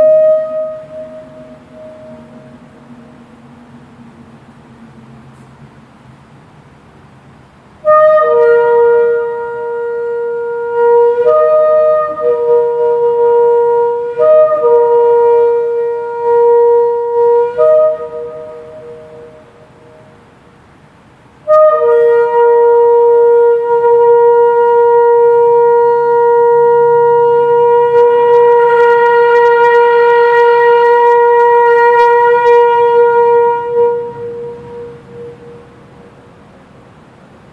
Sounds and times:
Wind instrument, woodwind instrument: 0.0s - 3.3s, 7.8s - 20.2s, 21.4s - 36.2s
Shofar: 0.0s - 3.6s, 7.8s - 20.2s, 21.4s - 36.3s.

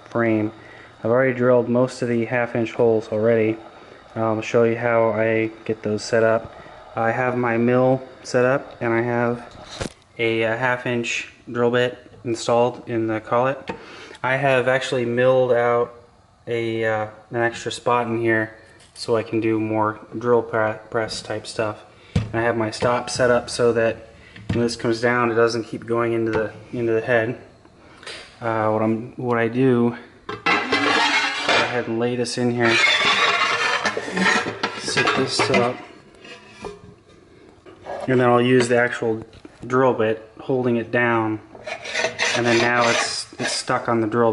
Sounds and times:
Speech: 0.0s - 3.6s, 4.2s - 9.5s, 10.2s - 27.5s, 28.4s - 30.1s, 30.7s - 33.5s, 34.2s - 35.9s, 37.9s - 41.5s, 42.2s - 44.3s.

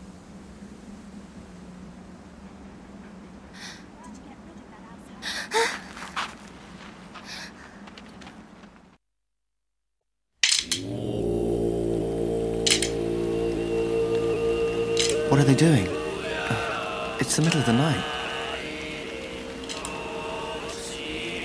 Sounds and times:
Speech: 4.0s - 5.4s, 17.2s - 18.1s.

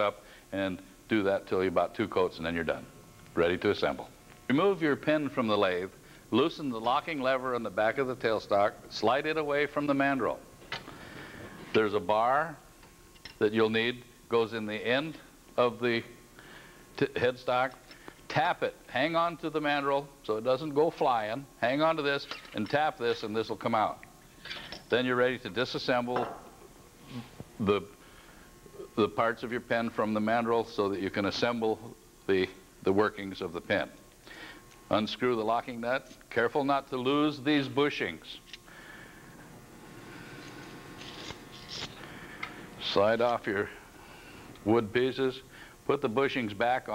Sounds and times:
Speech: 0.0s - 10.4s, 11.7s - 12.6s, 13.4s - 16.2s, 17.0s - 24.0s, 24.9s - 26.4s, 27.1s - 28.0s, 28.9s - 34.0s, 34.9s - 38.4s, 42.8s - 43.8s, 44.6s - 46.9s.

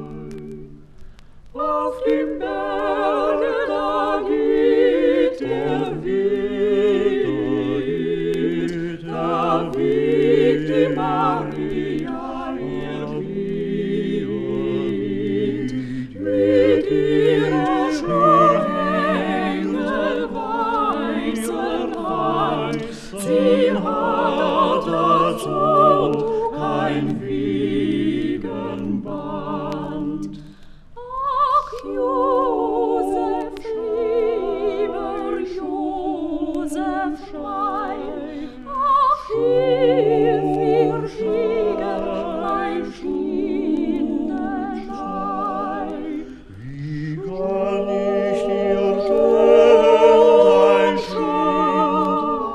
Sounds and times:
Music: 0.0s - 52.5s.

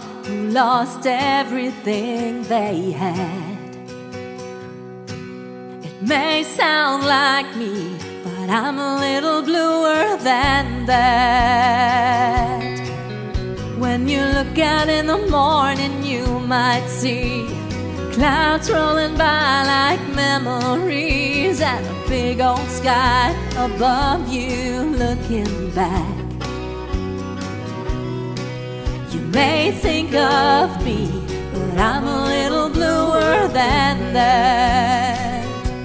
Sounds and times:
Music: 0.0s - 35.8s
Female singing: 0.3s - 3.6s, 6.0s - 12.7s, 13.8s - 17.5s, 18.2s - 26.2s, 29.1s - 35.6s.

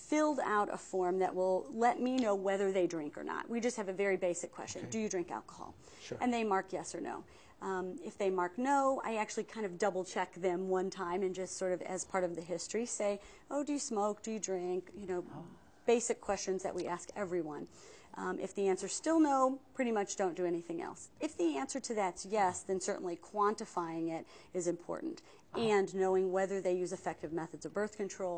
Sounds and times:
Conversation: 0.2s - 28.3s.

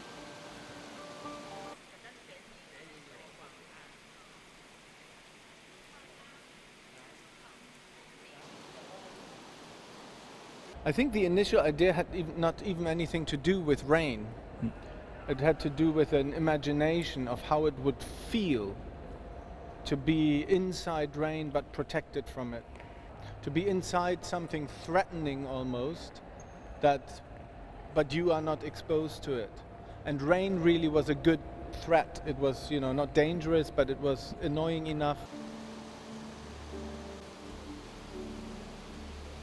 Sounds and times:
Speech: 10.9s - 18.8s, 19.9s - 22.6s, 28.0s - 29.5s, 30.1s - 35.3s.

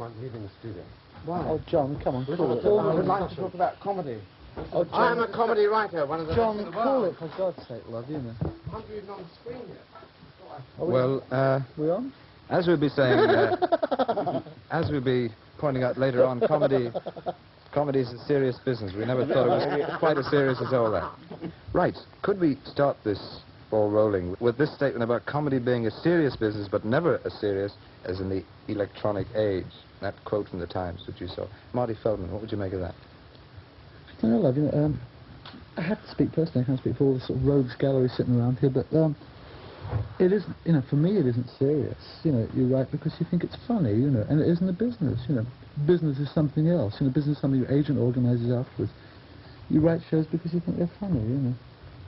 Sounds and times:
Speech: 0.0s - 9.9s, 10.6s - 13.6s, 14.7s - 17.0s, 17.7s - 33.0s, 34.2s - 35.1s, 35.8s - 39.2s, 40.2s - 49.0s, 49.7s - 51.6s
Laughter: 13.1s - 14.6s, 16.2s - 17.4s, 19.2s - 21.5s, 35.8s - 36.1s.

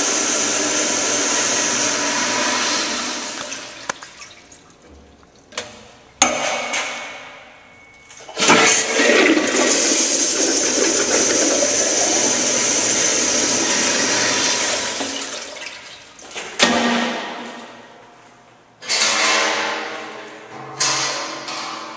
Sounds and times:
Toilet flush: 0.0s - 4.6s, 8.3s - 16.1s.

